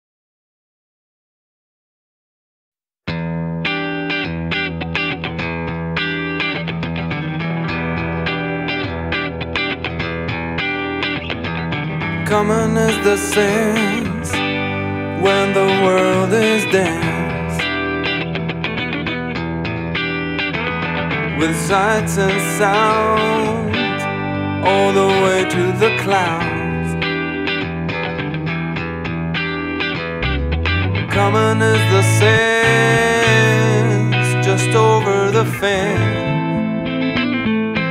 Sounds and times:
Music: 0:03.1 - 0:37.9.

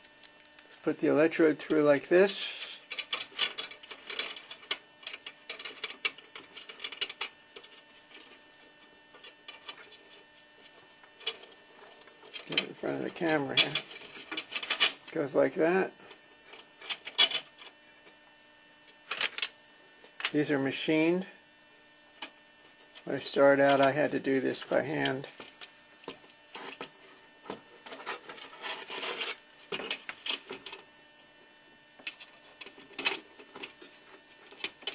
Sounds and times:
Speech: 0:00.8 - 0:02.8, 0:12.5 - 0:13.9, 0:15.1 - 0:16.0, 0:20.3 - 0:21.4, 0:23.0 - 0:25.3.

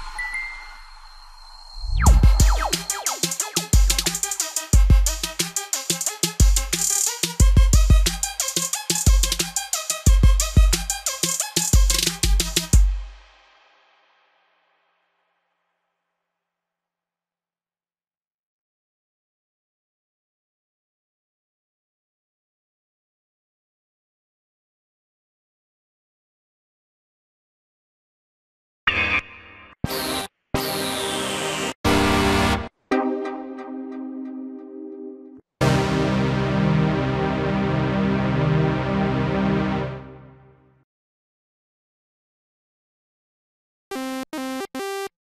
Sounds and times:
Music: 0:00.0 - 0:16.3, 0:28.9 - 0:40.8, 0:44.0 - 0:45.2.

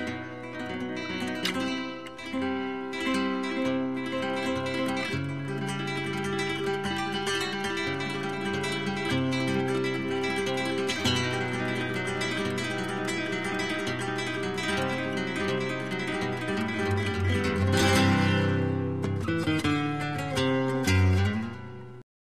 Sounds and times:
Acoustic guitar: 0:00.0 - 0:22.0.

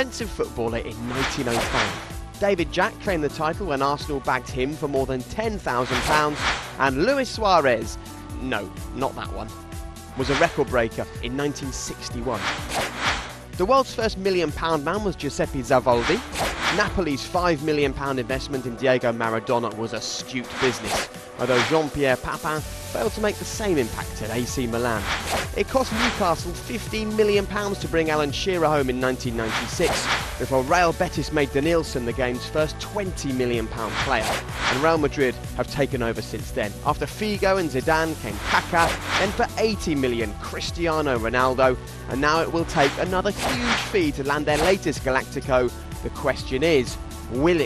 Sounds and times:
Speech: 0:00.0 - 0:09.6, 0:10.2 - 0:12.5, 0:13.6 - 0:47.6
Music: 0:00.0 - 0:47.6.

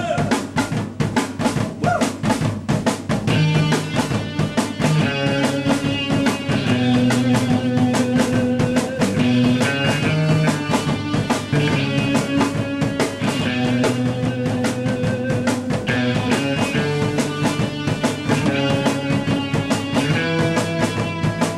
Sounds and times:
Rock and roll: 0:00.0 - 0:21.5.

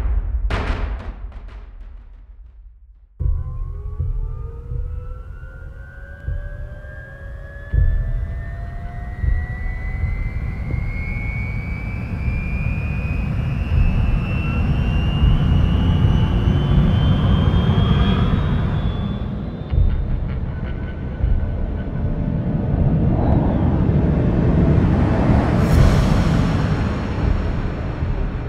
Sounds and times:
Fixed-wing aircraft, airplane: 0:03.7 - 0:28.4.

